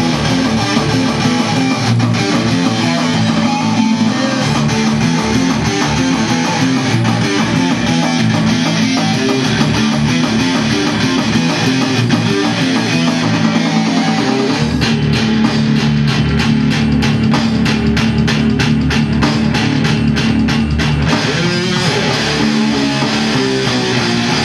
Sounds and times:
Guitar: 0.0s - 24.4s
Heavy metal: 0.0s - 24.4s.

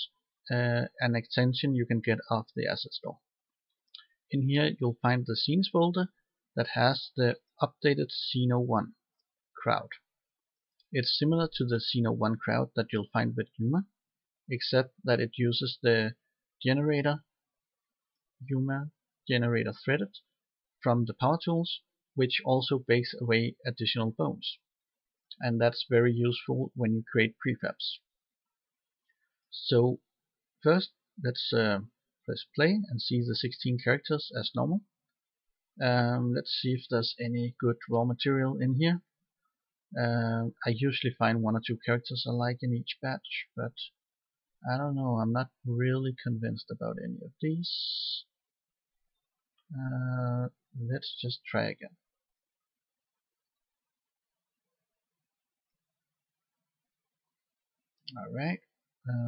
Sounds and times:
Speech: 0.0s - 3.3s, 4.3s - 9.0s, 9.6s - 10.1s, 10.9s - 17.3s, 18.4s - 24.7s, 25.3s - 28.1s, 29.5s - 35.0s, 35.8s - 39.2s, 39.9s - 44.0s, 44.6s - 48.4s, 49.7s - 52.0s, 58.1s - 59.2s.

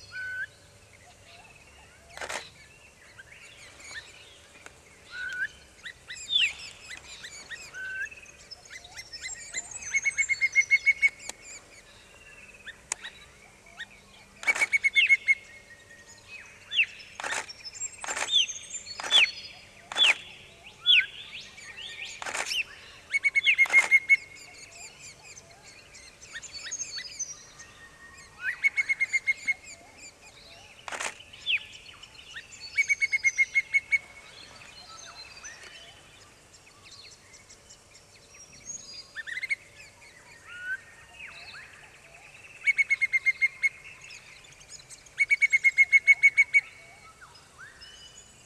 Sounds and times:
Bird vocalization, bird call, bird song: 0.0s - 48.4s.

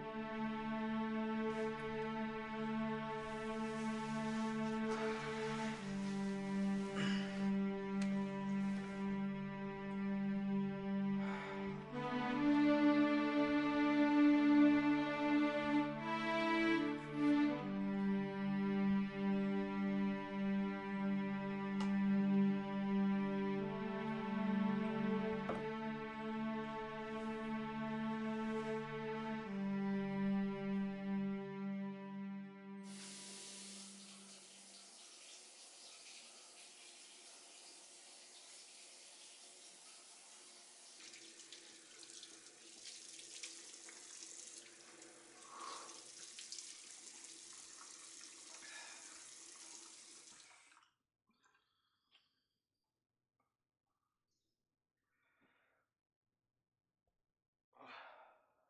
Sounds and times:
Water tap, faucet: 32.9s - 50.8s.

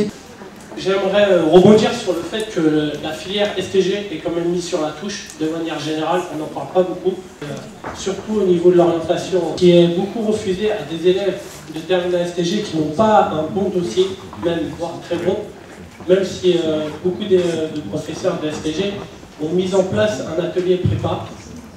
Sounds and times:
Speech: 0.0s - 0.2s, 0.8s - 21.7s.

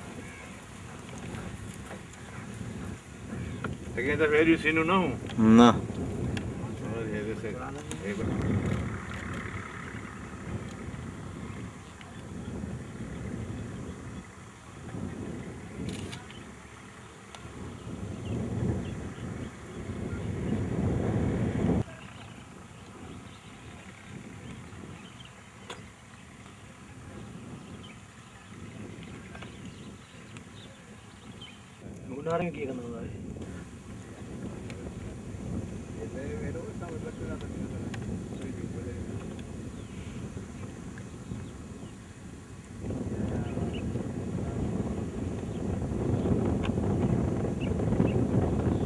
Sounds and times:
Speech: 6.6s - 8.3s, 32.0s - 33.2s, 36.0s - 39.1s.

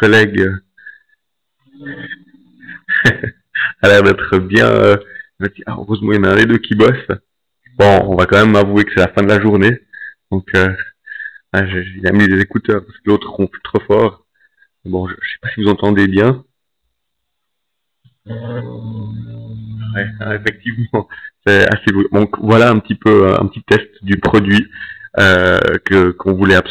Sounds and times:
Speech: 0.0s - 0.7s, 1.7s - 14.2s, 14.8s - 16.5s, 18.3s - 26.7s.

